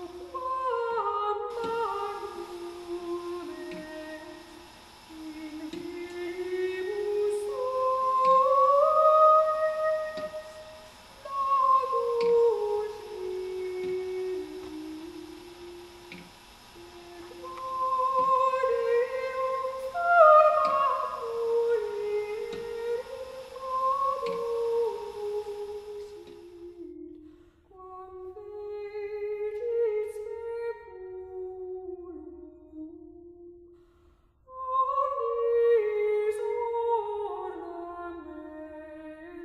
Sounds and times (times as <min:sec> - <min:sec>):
Music: 0:00.0 - 0:39.4.